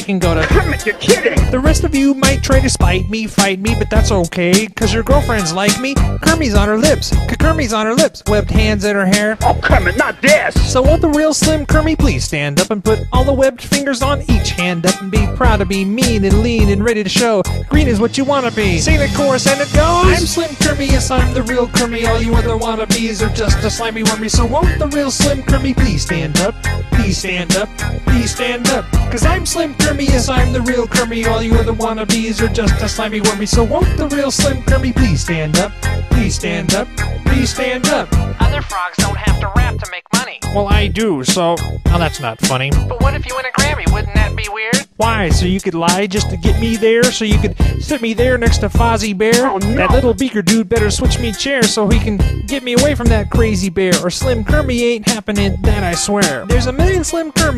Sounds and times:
Music: 0.0s - 57.5s.

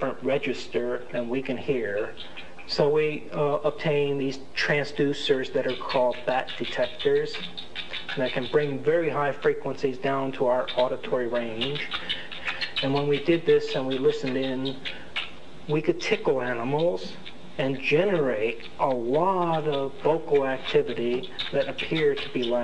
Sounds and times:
Rodents, rats, mice: 0.0s - 22.6s.

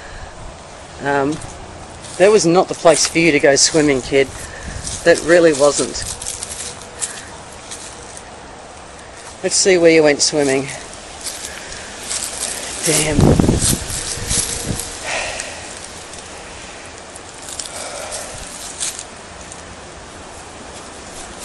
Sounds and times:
Speech: 1.0s - 1.4s, 2.2s - 4.3s, 5.0s - 6.0s, 9.4s - 10.9s, 12.8s - 13.2s.

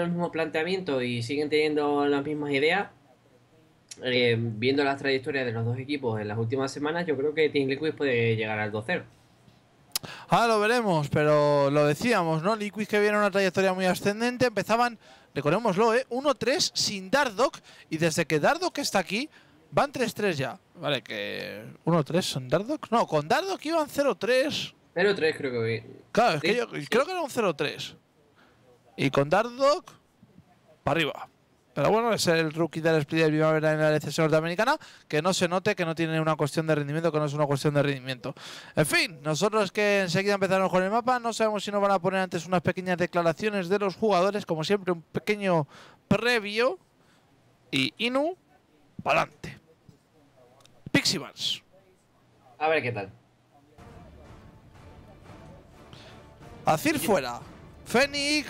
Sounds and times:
Speech: 0.0s - 9.1s, 10.3s - 46.8s, 47.7s - 53.8s, 56.7s - 58.5s.

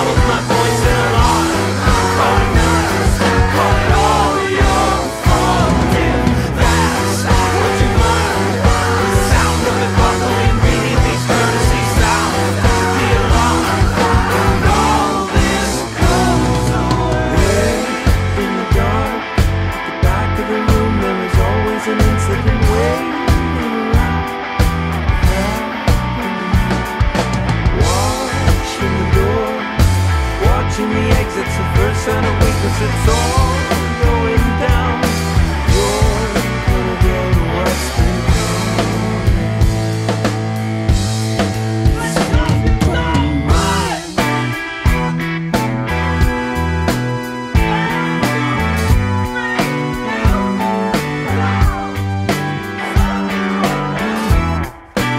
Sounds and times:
Punk rock: 0.0s - 55.1s.

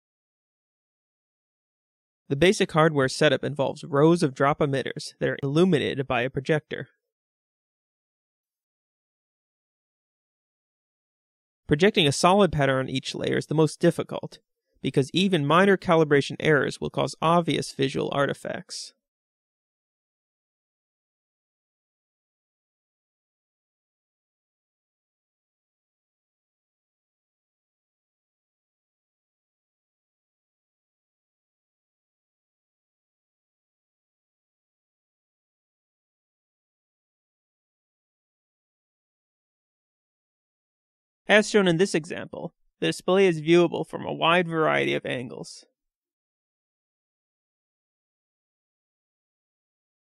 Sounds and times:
Speech: 2.3s - 7.0s, 11.7s - 19.0s, 41.3s - 45.7s.

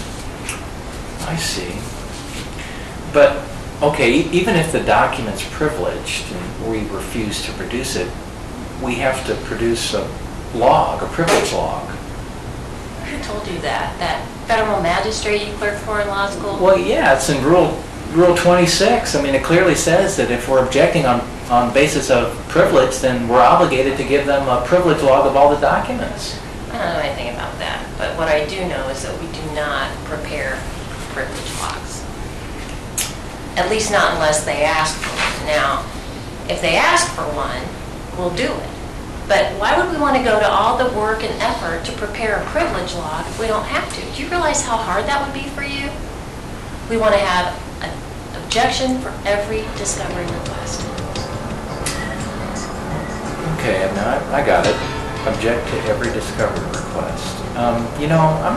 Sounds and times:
Inside, small room: 0.0s - 58.5s
Speech: 8.8s - 12.0s, 13.0s - 32.0s, 36.5s - 46.0s, 46.9s - 51.0s, 53.4s - 58.5s.

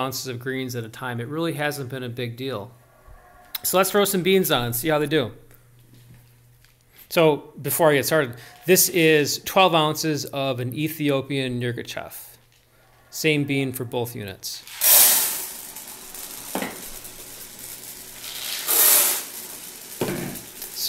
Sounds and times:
Speech: 0.0s - 2.7s, 3.6s - 5.4s, 7.1s - 12.4s, 13.2s - 14.6s.

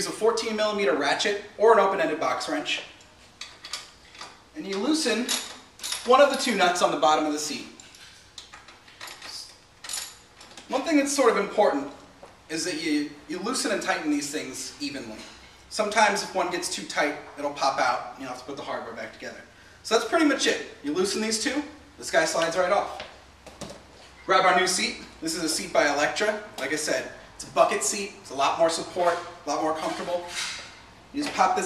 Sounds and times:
Speech: 0.0s - 2.9s, 4.6s - 5.4s, 6.1s - 7.8s, 10.7s - 23.1s, 24.3s - 30.4s, 31.2s - 31.6s.

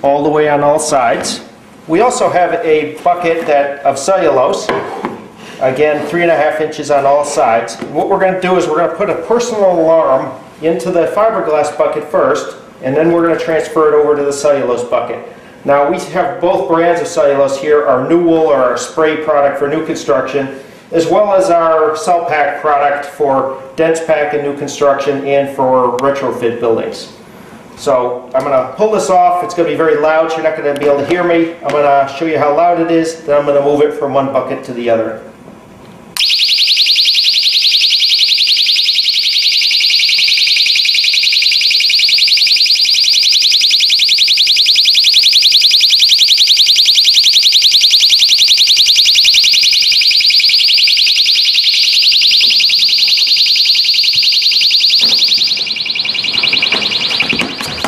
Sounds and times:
Speech: 0.0s - 4.9s, 5.6s - 27.2s, 27.8s - 35.3s.

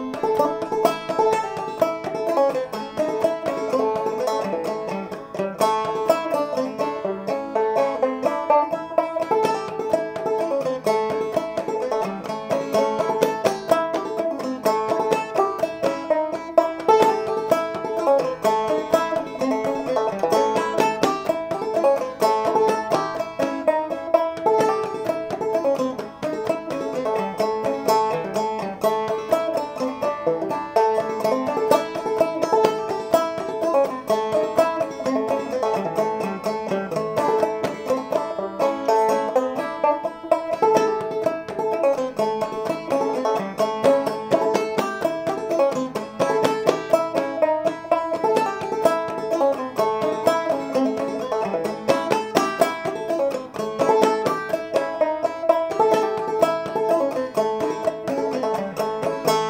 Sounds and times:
Banjo: 0.0s - 59.5s.

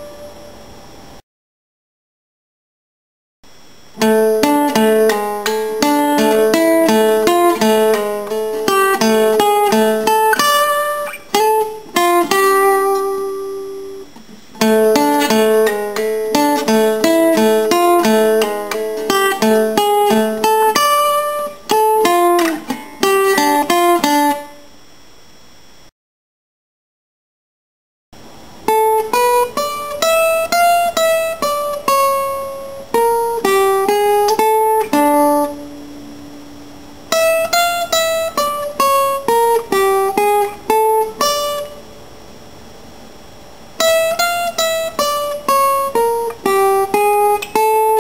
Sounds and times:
Guitar: 0.0s - 1.2s, 3.5s - 25.9s, 28.2s - 48.0s.

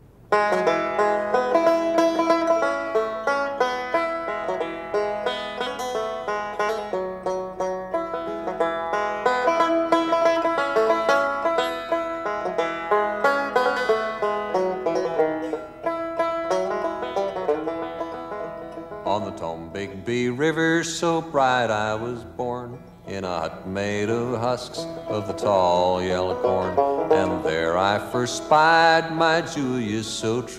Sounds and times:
Music: 0.0s - 20.0s, 23.4s - 30.5s.

